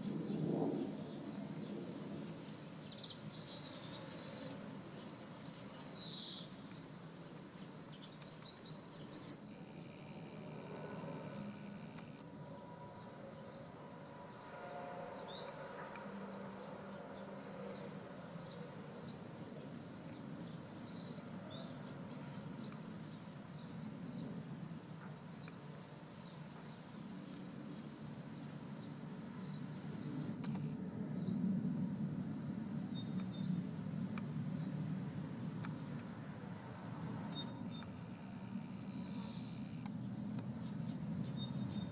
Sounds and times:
Environmental noise: 0.0s - 41.9s
Insect: 0.0s - 41.9s.

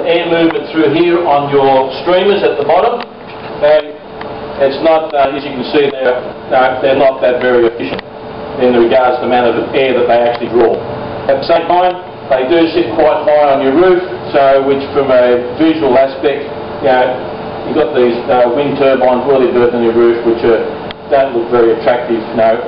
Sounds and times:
Speech: 0.0s - 4.0s, 4.6s - 8.0s, 8.6s - 22.6s.

